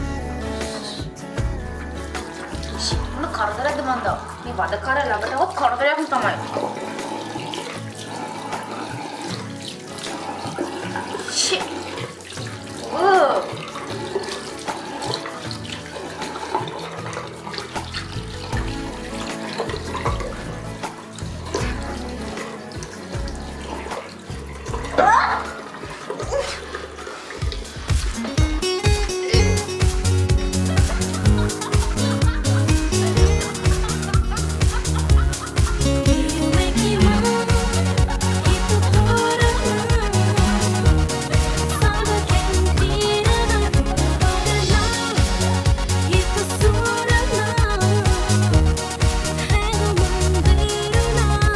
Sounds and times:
Music: 0.0 - 51.5
Sink (filling or washing): 0.0 - 51.5.

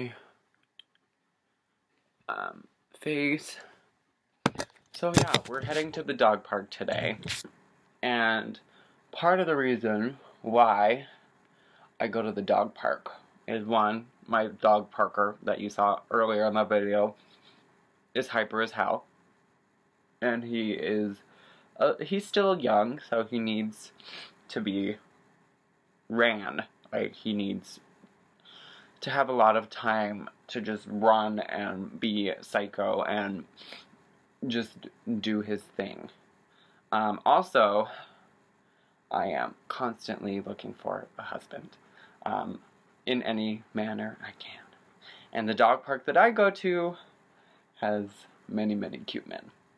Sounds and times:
Speech: 0.0 - 0.3, 2.3 - 3.8, 5.0 - 11.2, 12.0 - 17.2, 18.2 - 19.0, 20.2 - 21.2, 21.8 - 25.0, 26.1 - 27.8, 29.0 - 33.6, 34.4 - 36.2, 36.9 - 38.1, 39.1 - 44.7, 45.3 - 47.1, 47.8 - 49.5
Inside, small room: 0.0 - 49.7.

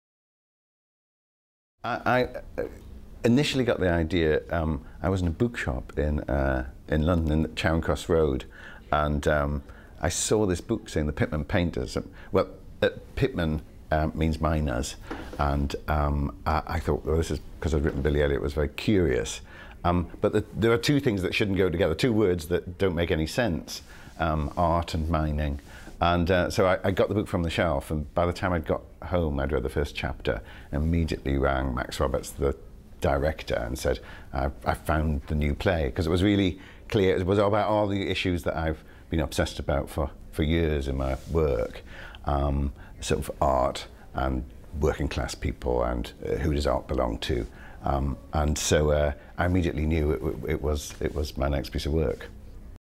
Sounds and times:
Speech: 1.8 - 52.4.

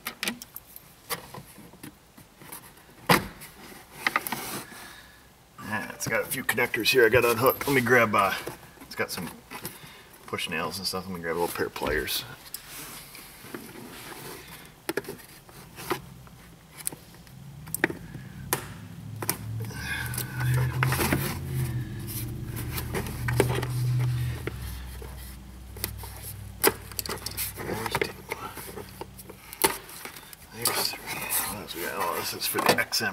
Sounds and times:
Speech: 5.6 - 9.4, 10.3 - 12.4, 27.6 - 28.5, 30.5 - 33.1
Car: 15.8 - 29.4
Engine: 17.2 - 29.6.

